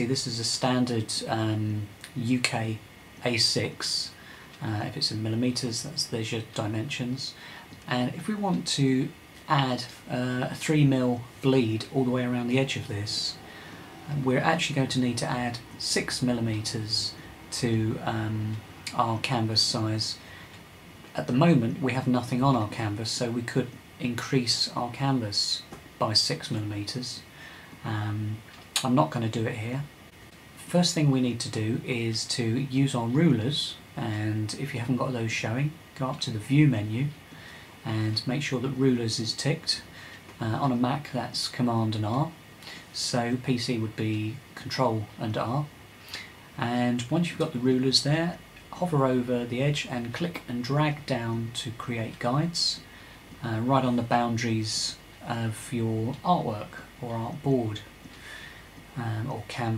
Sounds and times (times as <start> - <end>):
Speech: 0.0 - 20.3, 21.1 - 30.0, 30.6 - 37.2, 37.8 - 58.0, 58.9 - 59.7.